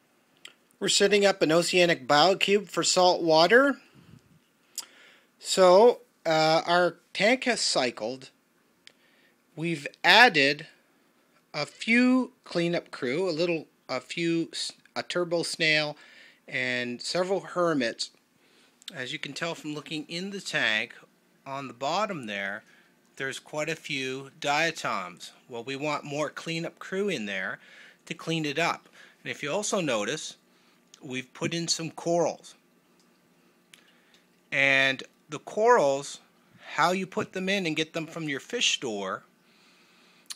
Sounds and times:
Speech: 0.8s - 3.8s, 5.4s - 8.4s, 9.6s - 10.8s, 11.6s - 18.2s, 18.9s - 30.4s, 31.0s - 32.6s, 34.5s - 39.3s.

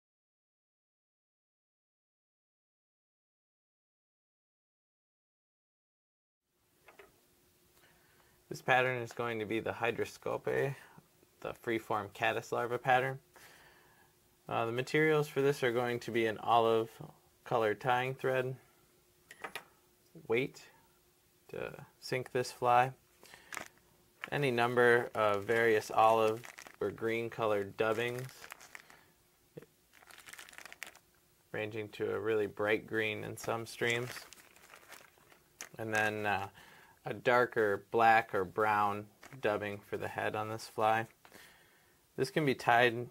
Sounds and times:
Speech: 8.5s - 10.8s, 11.4s - 13.2s, 14.5s - 18.6s, 20.2s - 20.8s, 21.5s - 23.0s, 24.3s - 28.5s, 31.5s - 34.4s, 35.7s - 41.2s, 42.2s - 43.1s
Crumpling, crinkling: 23.2s - 29.2s, 29.9s - 31.1s, 33.0s - 36.6s, 39.1s - 40.0s.

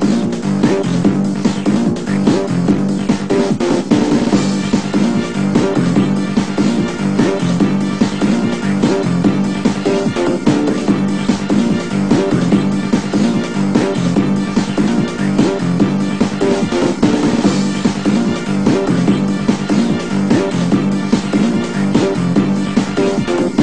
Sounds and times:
Background music: 0.0s - 23.6s.

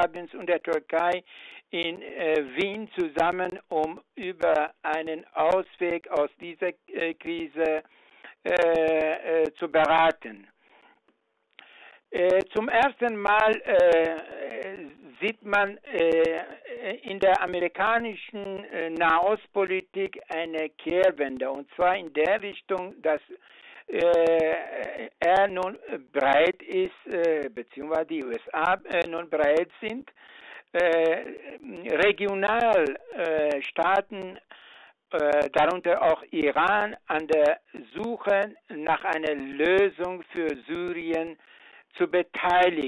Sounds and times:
Speech: 0.0s - 7.8s, 8.4s - 10.5s, 12.2s - 34.4s, 35.2s - 41.4s, 42.0s - 42.8s.

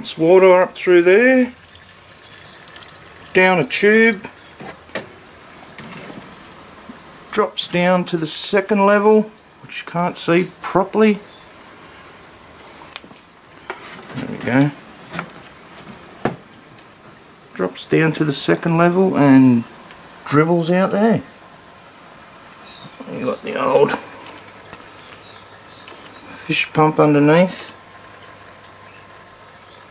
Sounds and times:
Speech: 0.0s - 1.6s, 3.3s - 4.3s, 7.3s - 11.3s, 14.1s - 14.8s, 17.6s - 21.3s, 23.0s - 24.1s, 26.3s - 27.8s.

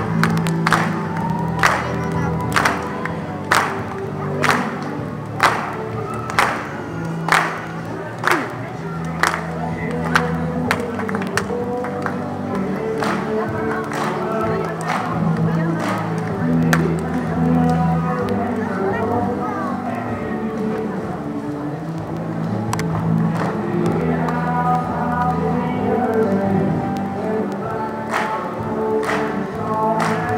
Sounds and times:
Music: 0.0s - 30.3s
Speech: 1.6s - 22.4s.

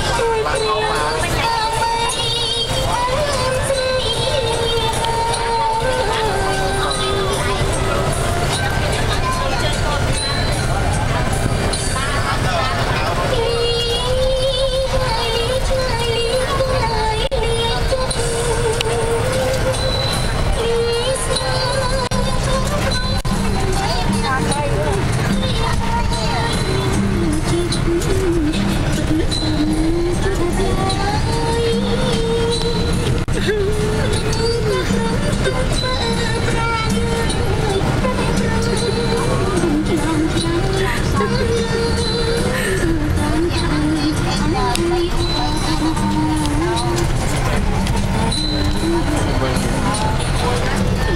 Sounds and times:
Bus: 0.0s - 51.1s
Music: 0.0s - 51.1s.

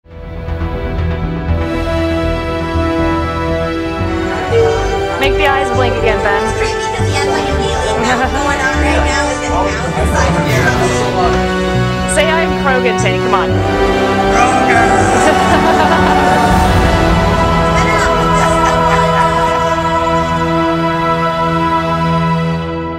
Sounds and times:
Theme music: 0.1s - 22.9s.

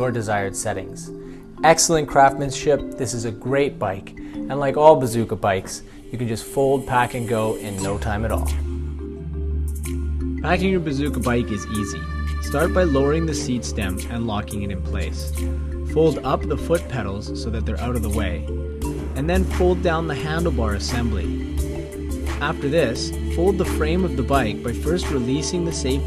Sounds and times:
Speech: 0.0s - 8.6s, 10.5s - 15.3s, 16.0s - 18.4s, 19.2s - 21.3s, 22.4s - 26.0s
Music: 0.0s - 26.0s.

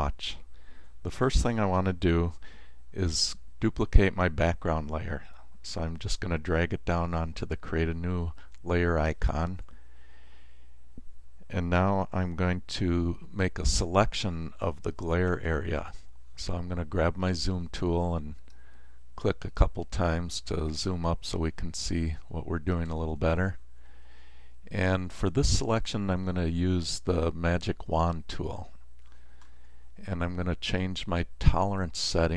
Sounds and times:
Speech: 0.0s - 9.7s, 11.4s - 18.4s, 19.2s - 23.6s, 24.7s - 28.8s, 30.0s - 32.3s.

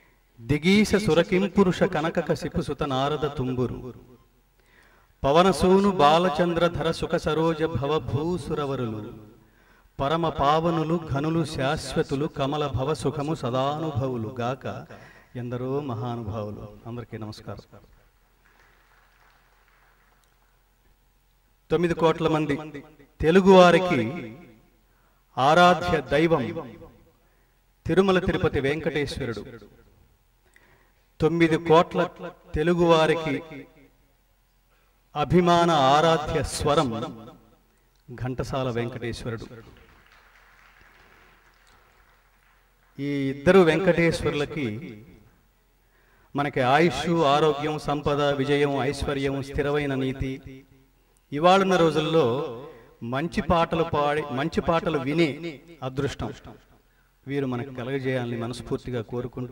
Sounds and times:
Narration, monologue: 0.0s - 59.5s
Male speech, man speaking: 0.4s - 4.0s, 5.2s - 9.2s, 10.0s - 17.8s, 21.7s - 24.4s, 25.4s - 26.8s, 27.8s - 29.7s, 31.2s - 33.5s, 35.2s - 37.3s, 38.1s - 39.8s, 43.0s - 45.0s, 46.4s - 50.5s, 51.3s - 56.6s, 57.3s - 59.5s.

